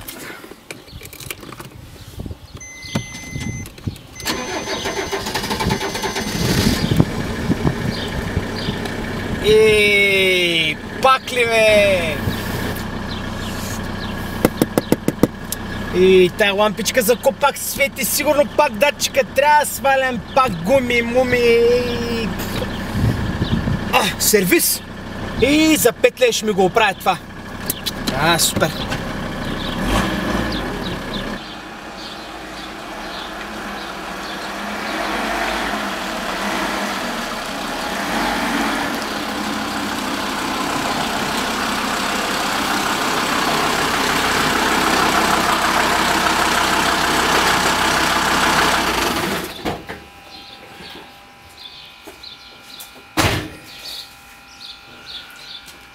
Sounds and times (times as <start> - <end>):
Car: 0.0 - 49.7
Speech: 9.4 - 12.3, 15.9 - 22.6, 23.9 - 27.2, 27.9 - 28.9.